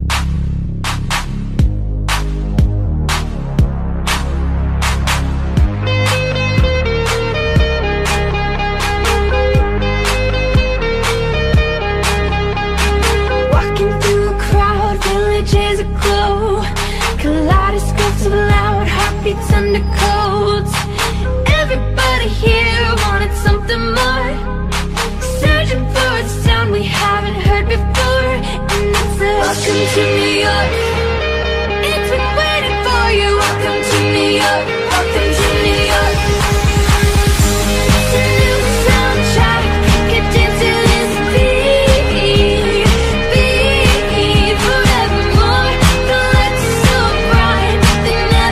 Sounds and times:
Music: 0.0 - 48.5.

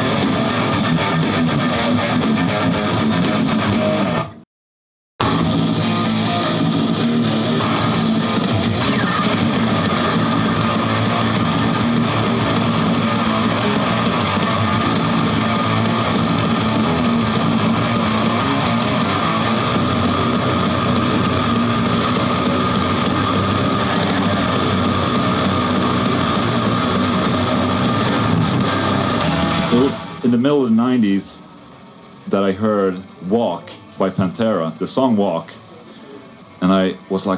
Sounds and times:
Guitar: 0.0 - 4.4, 5.2 - 37.3.

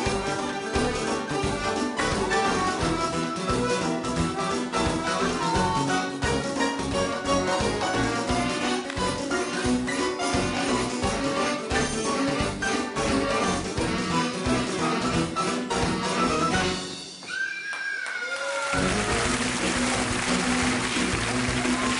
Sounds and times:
Music: 0.0 - 17.4, 18.6 - 21.9.

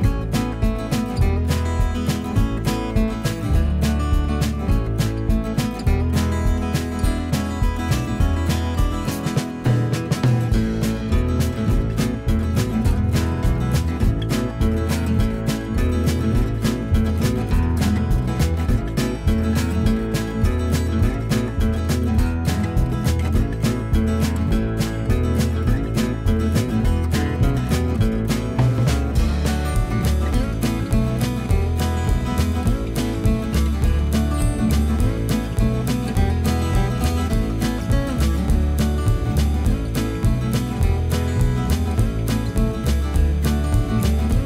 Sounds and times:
Music: 0.0 - 44.4.

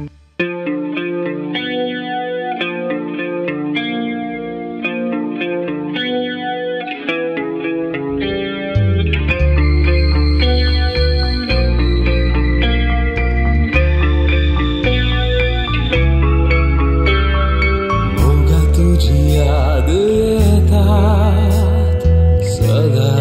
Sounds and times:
Effects unit: 0.0 - 23.2
Rock music: 0.0 - 23.2.

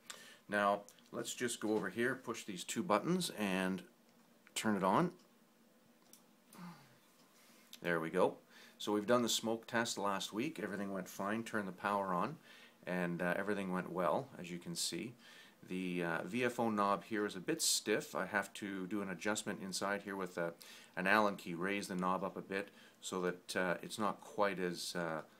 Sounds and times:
Speech: 0.5 - 3.9, 4.6 - 5.2, 7.8 - 25.4.

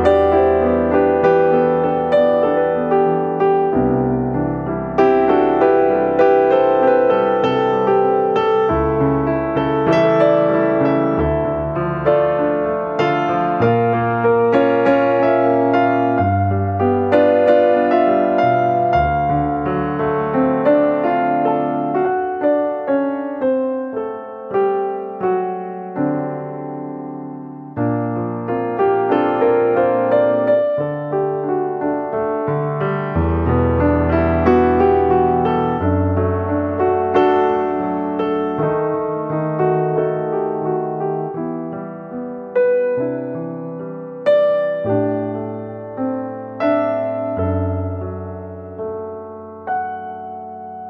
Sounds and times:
Music: 0.0 - 50.9.

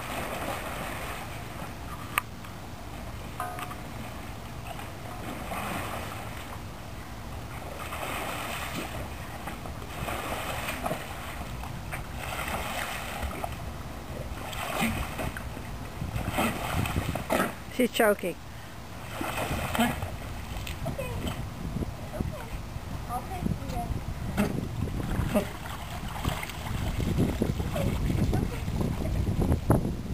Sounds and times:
Splash, splatter: 0.0 - 1.3, 7.7 - 9.0, 9.9 - 11.4, 12.2 - 13.5, 14.4 - 15.4, 16.2 - 17.6, 19.1 - 20.8, 25.1 - 28.9.

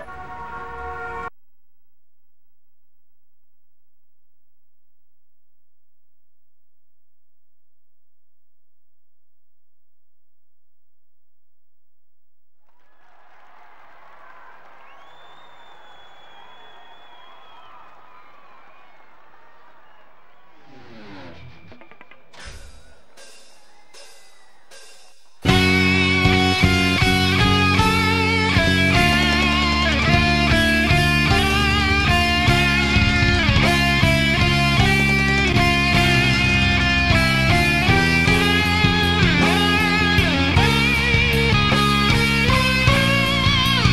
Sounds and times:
Bass guitar: 25.4 - 43.9.

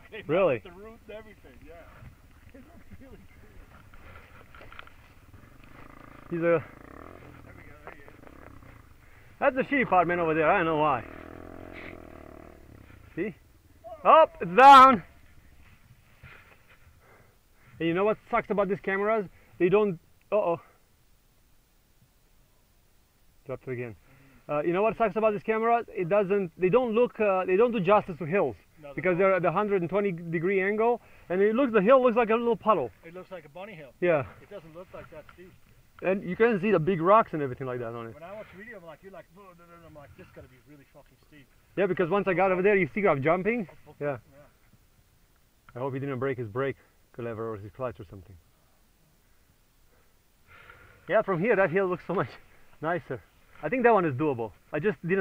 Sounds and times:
Speech: 0.0 - 3.7, 7.4 - 8.2, 9.4 - 11.1, 13.2 - 15.1, 17.8 - 20.8, 23.5 - 44.5, 45.7 - 48.4, 51.1 - 55.2.

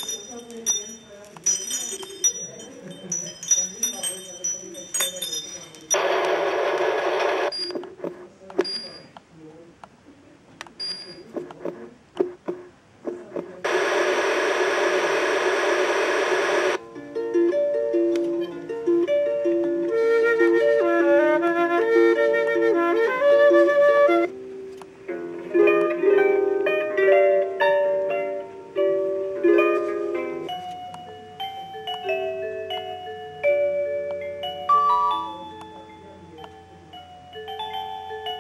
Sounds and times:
Music: 0.0 - 6.0, 16.8 - 38.4.

